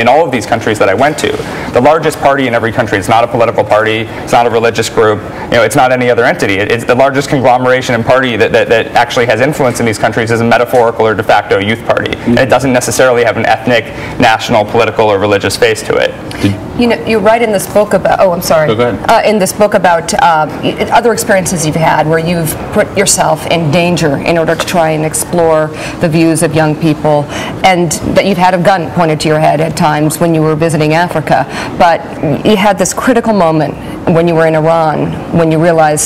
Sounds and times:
Speech: 16.4 - 16.6, 18.6 - 19.3.

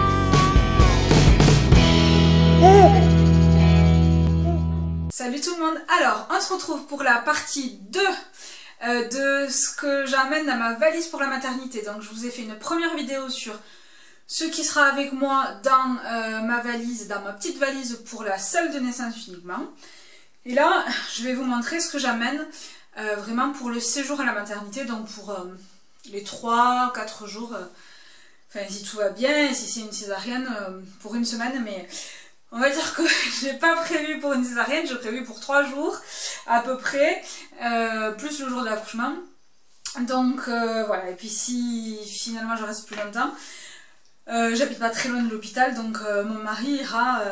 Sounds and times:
Speech: 5.2 - 13.6, 14.3 - 19.8, 20.4 - 27.7, 28.5 - 39.2, 39.9 - 43.4, 44.3 - 47.3.

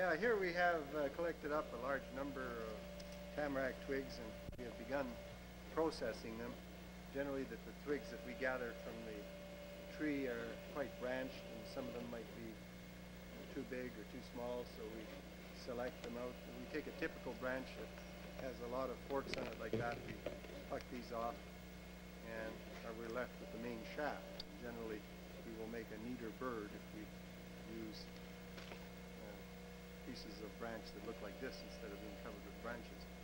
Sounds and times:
Speech: 0.0 - 2.8, 3.4 - 9.3, 9.9 - 12.6, 13.4 - 21.4, 22.2 - 28.1, 29.2 - 33.1.

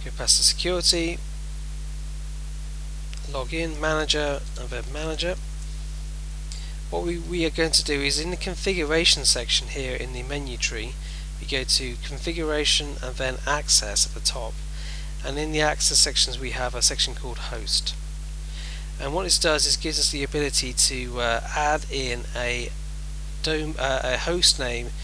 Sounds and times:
Speech: 0.0 - 1.2, 3.2 - 5.4, 6.6 - 14.6, 15.2 - 18.0, 19.0 - 22.8, 23.4 - 25.0.

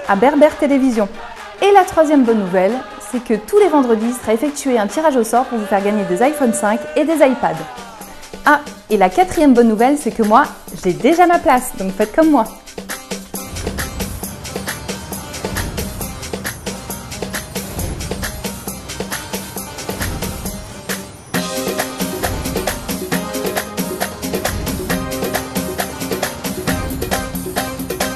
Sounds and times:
Music: 0.0 - 28.1.

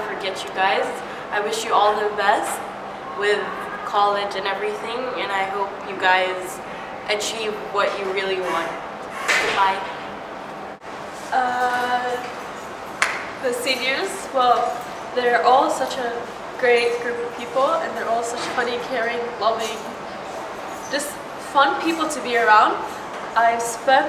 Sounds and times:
Speech: 0.0 - 8.8, 11.3 - 12.3, 13.4 - 20.0, 20.9 - 24.0.

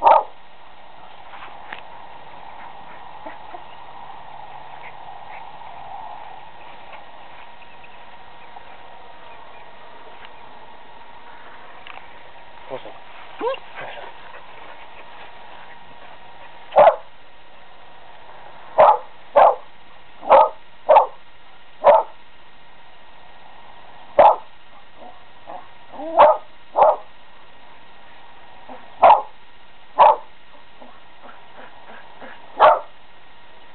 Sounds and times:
Bow-wow: 0.0 - 0.4, 16.8 - 17.1, 18.8 - 19.7, 20.3 - 21.2, 21.8 - 22.2, 24.2 - 27.1, 28.7 - 29.4, 30.0 - 32.9.

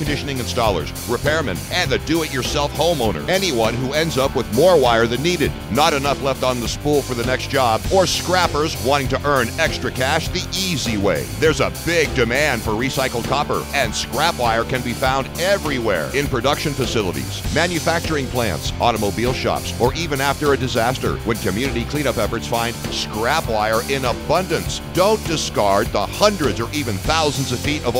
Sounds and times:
Music: 0.0 - 28.0
Speech: 0.0 - 28.0.

